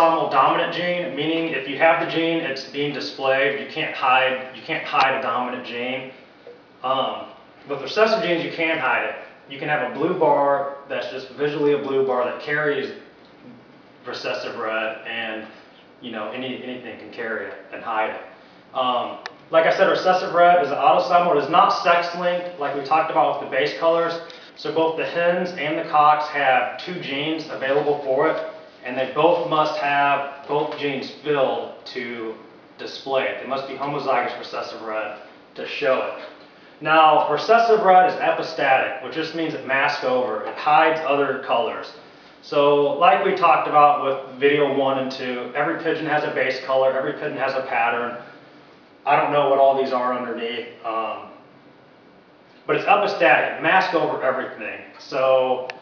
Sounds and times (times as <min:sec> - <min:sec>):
Speech: 0:00.0 - 0:06.2, 0:06.8 - 0:48.4, 0:49.0 - 0:51.4, 0:52.6 - 0:55.8.